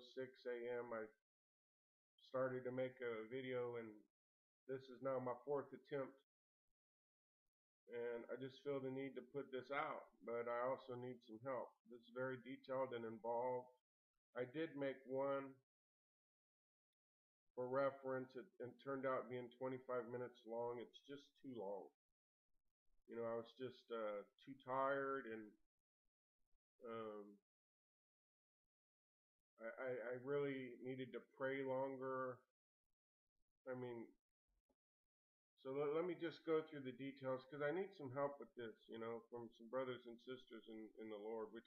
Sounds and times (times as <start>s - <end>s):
Speech: 0.0s - 1.2s, 2.2s - 4.1s, 4.7s - 6.2s, 7.9s - 13.8s, 14.4s - 15.6s, 17.6s - 22.0s, 23.1s - 25.6s, 26.8s - 27.4s, 29.6s - 32.5s, 33.7s - 34.2s, 35.6s - 41.6s.